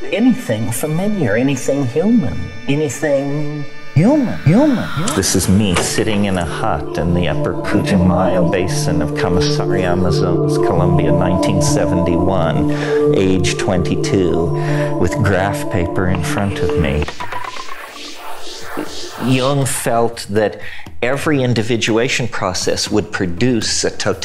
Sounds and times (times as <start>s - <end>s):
Speech: 0.0s - 17.2s, 19.2s - 24.2s
Electronica: 3.9s - 20.0s.